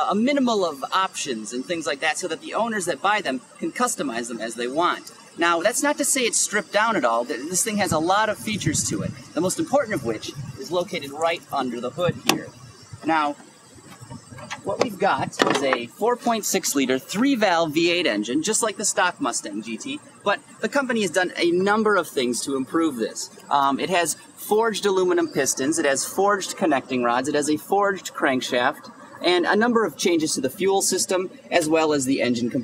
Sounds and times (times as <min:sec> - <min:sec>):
Speech: 0:00.0 - 0:13.4, 0:14.5 - 0:32.6.